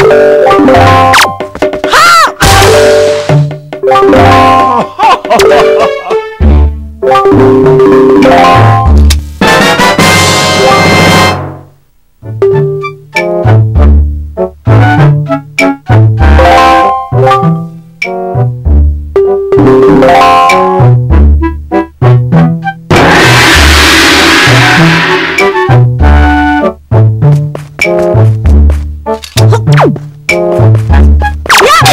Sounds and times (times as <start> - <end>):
Music: 0.0 - 31.9.